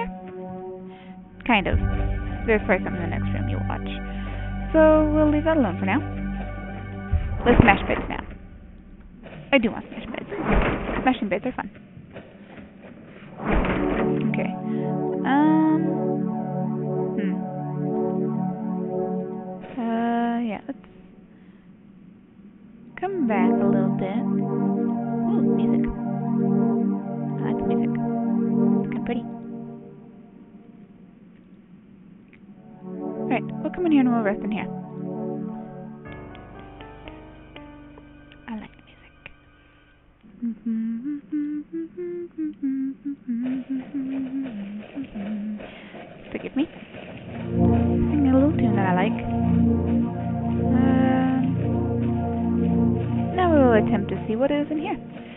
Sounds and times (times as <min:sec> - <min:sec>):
Music: 0:00.0 - 0:09.2, 0:13.4 - 0:21.1, 0:22.9 - 0:30.9, 0:32.6 - 0:40.2, 0:47.2 - 0:55.3
Speech: 0:01.4 - 0:01.8, 0:02.5 - 0:04.0, 0:04.7 - 0:06.1, 0:07.5 - 0:08.3, 0:09.6 - 0:10.4, 0:11.0 - 0:11.7, 0:14.2 - 0:14.6, 0:15.2 - 0:16.0, 0:17.2 - 0:17.4, 0:19.7 - 0:20.8, 0:23.0 - 0:24.4, 0:25.3 - 0:26.0, 0:27.4 - 0:28.0, 0:28.9 - 0:29.3, 0:33.3 - 0:34.7, 0:38.5 - 0:38.8, 0:46.3 - 0:46.7, 0:48.1 - 0:49.2, 0:50.7 - 0:51.6, 0:53.4 - 0:55.0.